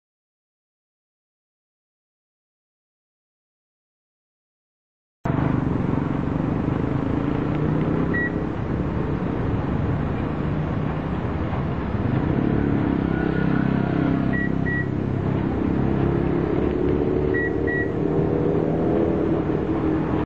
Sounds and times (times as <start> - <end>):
Beep, bleep: 8.1 - 8.4, 14.4 - 14.9, 17.4 - 18.0.